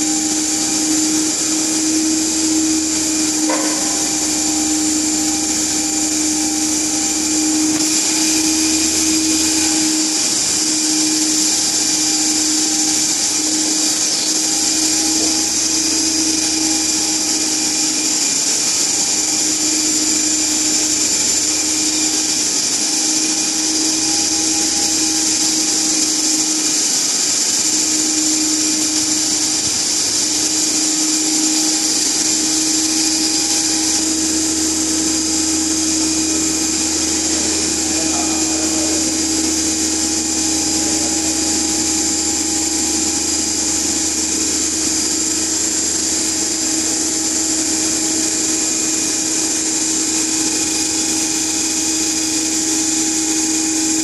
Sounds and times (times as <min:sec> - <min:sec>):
Speech: 0:37.9 - 0:39.2.